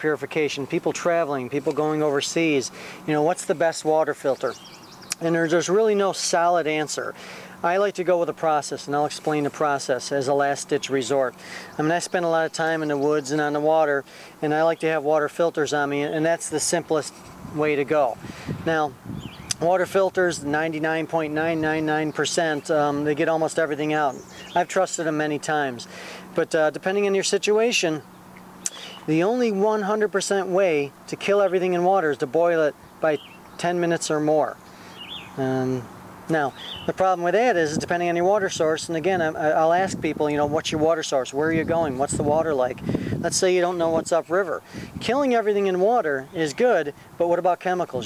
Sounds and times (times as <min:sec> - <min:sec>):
Speech: 0:00.0 - 0:04.6, 0:05.2 - 0:28.0, 0:29.1 - 0:34.6, 0:35.4 - 0:48.0.